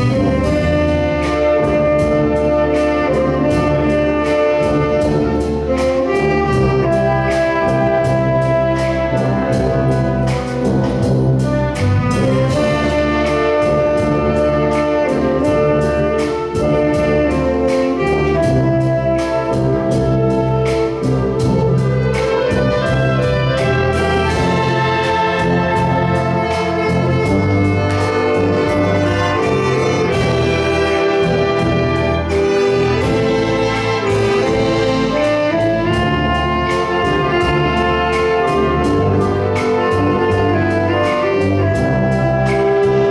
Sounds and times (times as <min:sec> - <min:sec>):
Classical music: 0:00.0 - 0:43.1
Orchestra: 0:00.0 - 0:43.1.